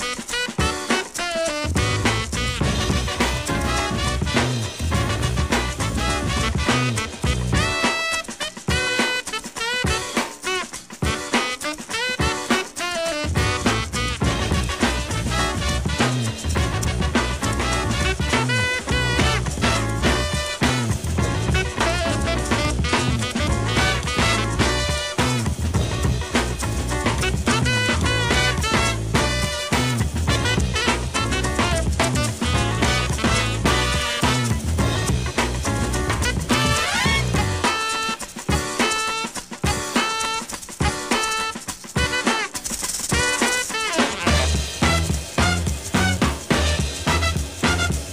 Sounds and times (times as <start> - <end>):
Music: 0.0 - 48.1.